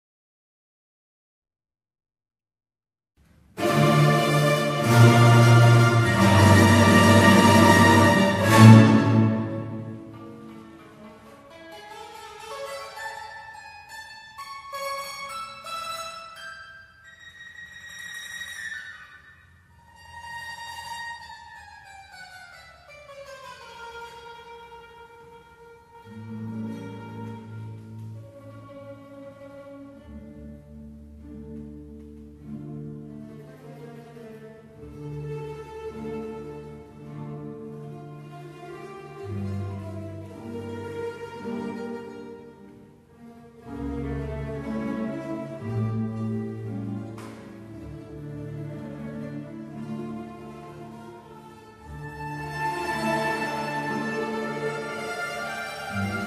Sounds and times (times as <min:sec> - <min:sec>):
Musical instrument: 0:03.6 - 0:19.2, 0:43.6 - 0:56.2.